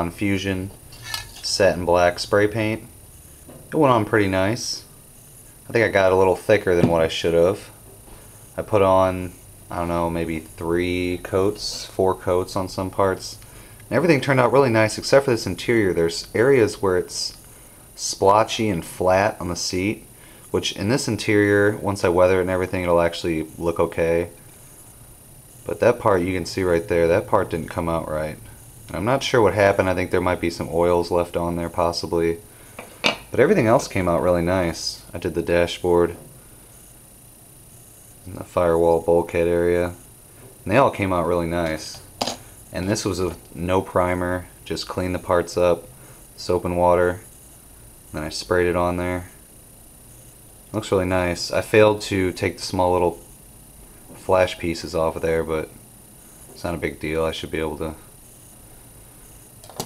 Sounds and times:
Speech: 0.0 - 0.8, 1.4 - 2.9, 3.7 - 4.9, 5.7 - 7.8, 8.6 - 17.4, 18.0 - 24.4, 25.6 - 32.4, 33.3 - 36.2, 38.3 - 40.0, 40.6 - 42.1, 42.7 - 47.3, 48.1 - 49.4, 50.7 - 53.2, 54.1 - 55.8, 56.6 - 58.1
Inside, small room: 0.0 - 59.8.

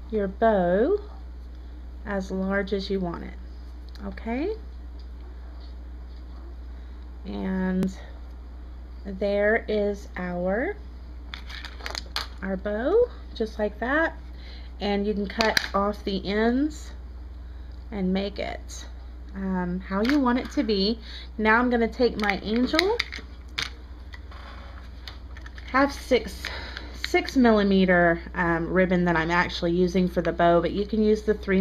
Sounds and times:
Inside, small room: 0.0 - 31.6
Speech: 2.1 - 3.4, 4.0 - 4.6, 7.3 - 8.1, 9.1 - 10.8, 12.4 - 14.2, 14.8 - 17.0, 17.9 - 23.0, 25.7 - 26.4, 27.1 - 31.6.

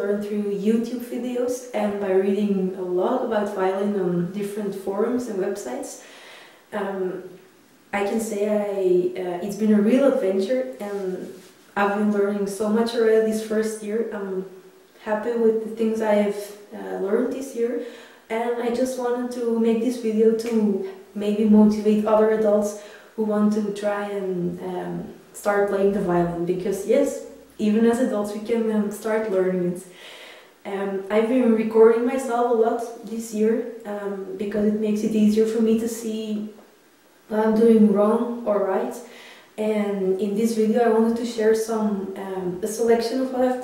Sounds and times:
Speech: 0.0 - 6.0, 6.7 - 29.9, 30.6 - 36.6, 37.3 - 43.6.

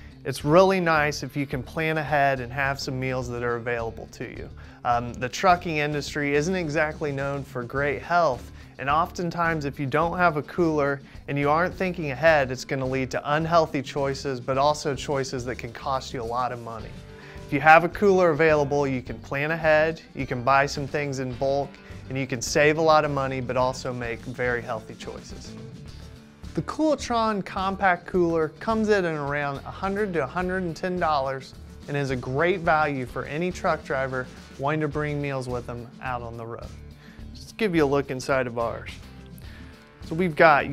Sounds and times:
Music: 0.0 - 40.7
Speech: 0.2 - 25.6, 26.6 - 39.0, 40.1 - 40.7.

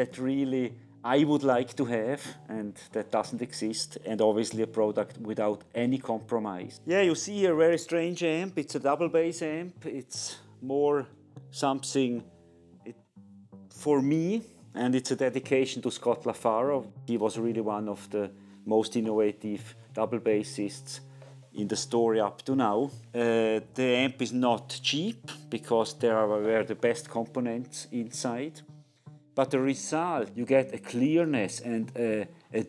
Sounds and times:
Speech: 0.0 - 12.2, 13.8 - 21.0, 21.6 - 28.6, 29.4 - 32.6
Music: 0.0 - 32.6.

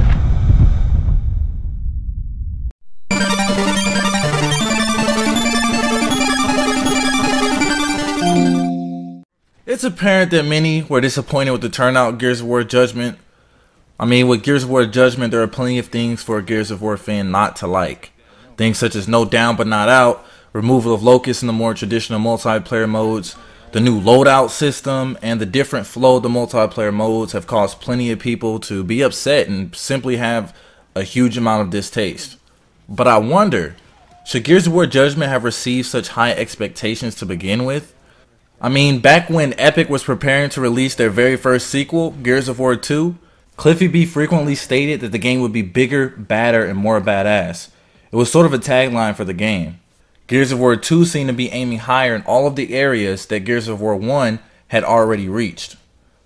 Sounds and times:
Speech: 9.7 - 13.2, 14.0 - 38.0, 38.6 - 55.9.

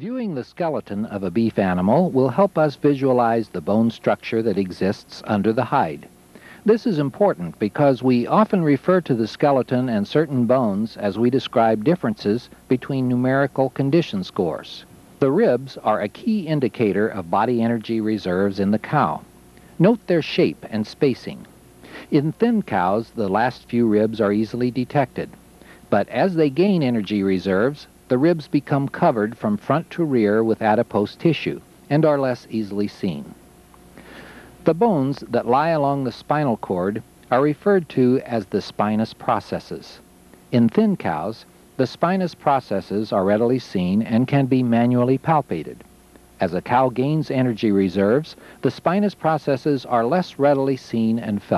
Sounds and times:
Speech: 0.0 - 33.4, 34.6 - 51.5.

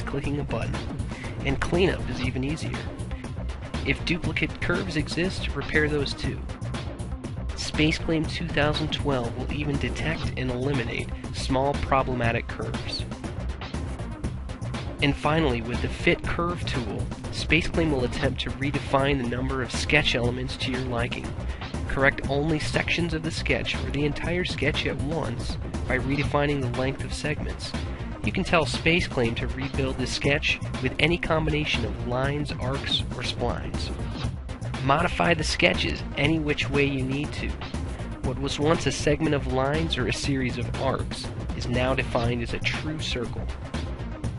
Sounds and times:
Speech: 0.0 - 2.9, 3.8 - 6.4, 7.6 - 13.1, 15.0 - 21.3, 21.9 - 33.9, 34.8 - 37.5, 38.3 - 43.5
Music: 0.0 - 44.3.

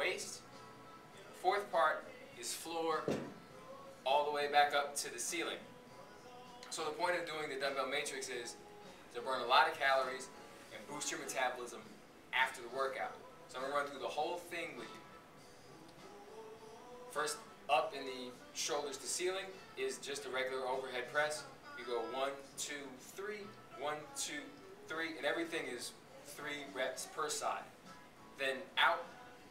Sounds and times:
Music: 0.0 - 29.5
Speech: 4.1 - 5.6, 9.2 - 14.9, 17.2 - 27.7, 28.4 - 29.1.

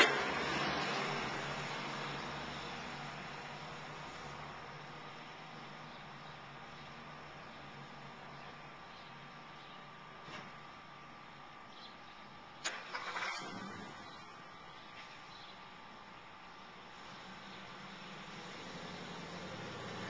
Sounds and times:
Car: 0.0 - 20.0.

